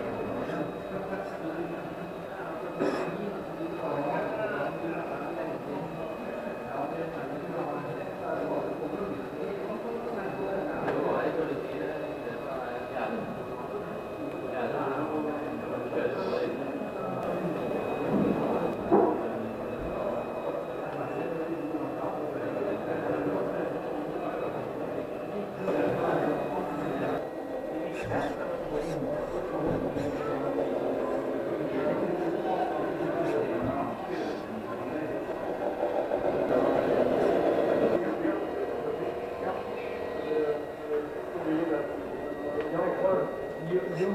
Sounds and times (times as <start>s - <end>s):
Speech: 0.0s - 44.1s.